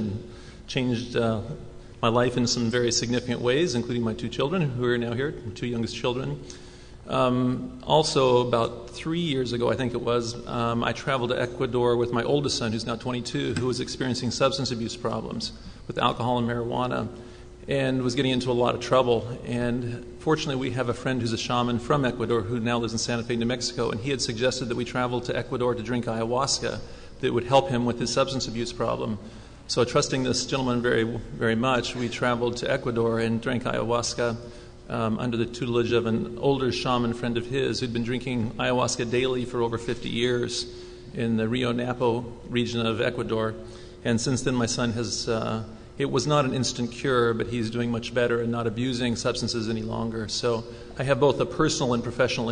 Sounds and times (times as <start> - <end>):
Speech: 0.0 - 6.4, 7.1 - 52.5.